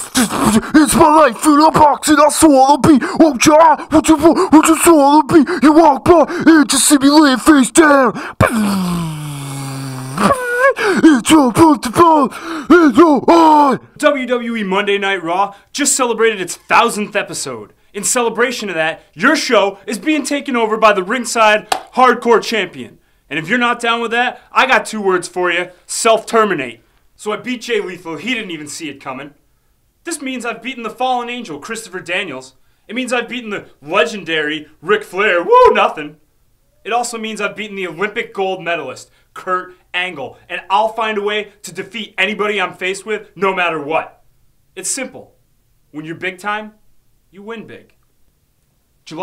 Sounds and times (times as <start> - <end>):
Inside, small room: 0.0 - 49.2
Speech: 0.2 - 8.2, 11.0 - 29.4, 30.0 - 36.2, 36.8 - 44.2, 44.8 - 48.0.